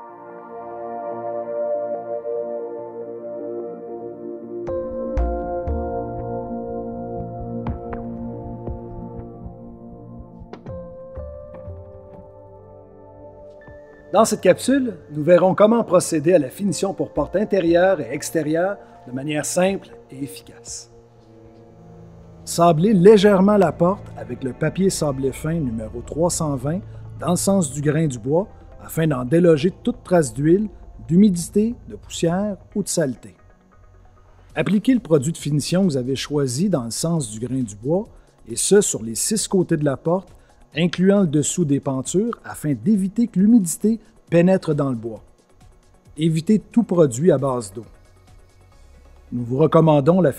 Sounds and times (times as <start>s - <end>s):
Music: 0.0s - 50.3s
Speech: 14.1s - 20.9s, 22.5s - 33.4s, 34.6s - 45.2s, 46.2s - 47.9s, 49.3s - 50.3s.